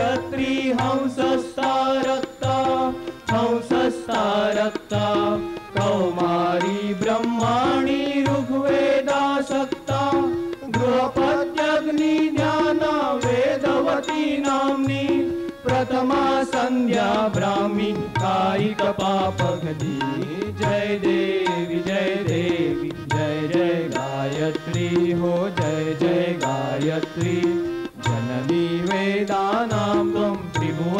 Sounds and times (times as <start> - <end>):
Carnatic music: 0.0 - 30.9.